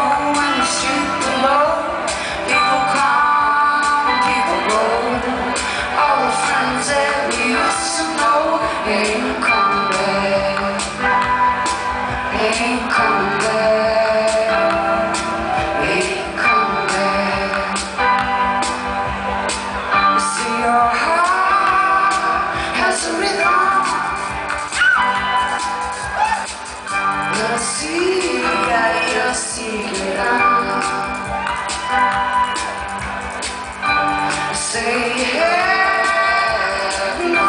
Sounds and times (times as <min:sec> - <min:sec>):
Music: 0:00.0 - 0:37.4.